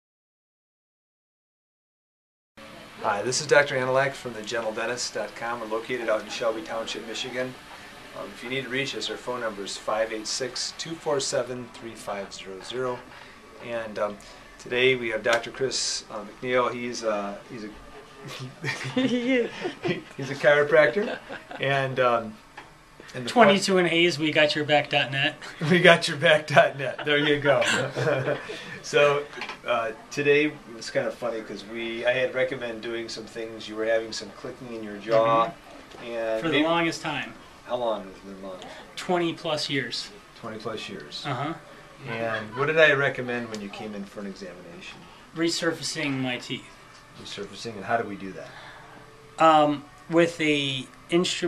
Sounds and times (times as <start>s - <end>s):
Speech: 3.0s - 22.4s, 23.1s - 46.6s.